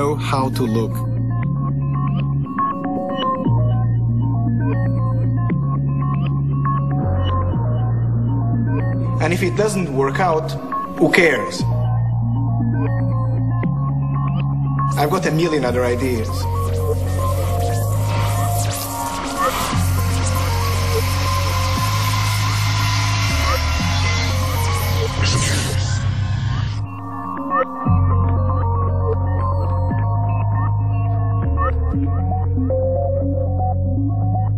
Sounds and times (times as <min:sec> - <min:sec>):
Music: 0:00.0 - 0:34.5.